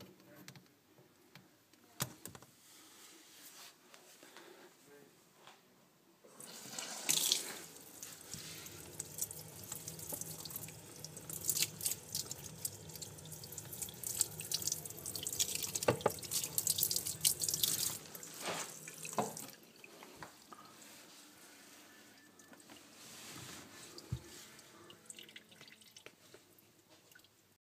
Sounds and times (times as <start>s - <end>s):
Water: 7.0s - 21.0s, 22.7s - 27.4s.